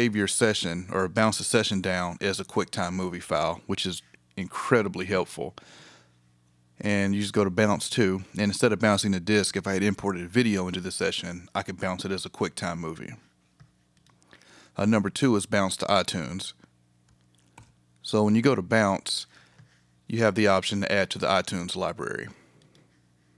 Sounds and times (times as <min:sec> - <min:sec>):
Speech: 0:00.0 - 0:05.6, 0:06.8 - 0:13.3, 0:14.8 - 0:16.7, 0:18.0 - 0:19.4, 0:20.1 - 0:22.4.